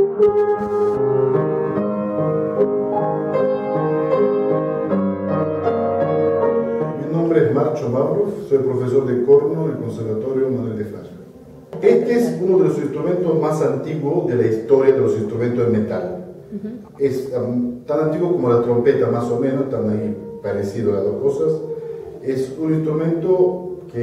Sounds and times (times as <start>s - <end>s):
Music: 0.0s - 15.6s, 18.1s - 24.0s
Speech: 7.0s - 11.2s, 11.8s - 21.6s, 22.2s - 24.0s.